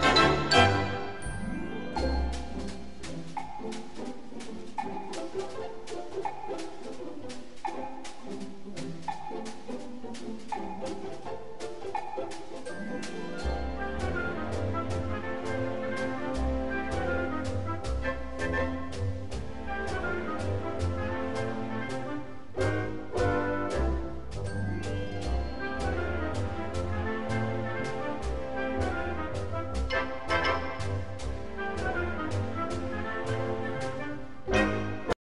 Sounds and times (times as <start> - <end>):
Music: 0.0 - 35.2.